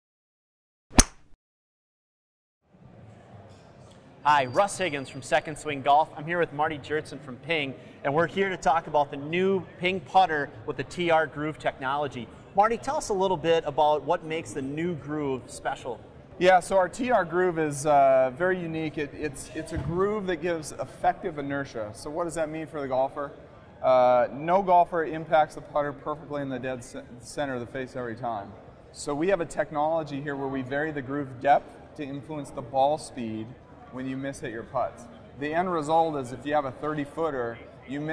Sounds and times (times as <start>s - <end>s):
Speech: 4.2s - 38.1s.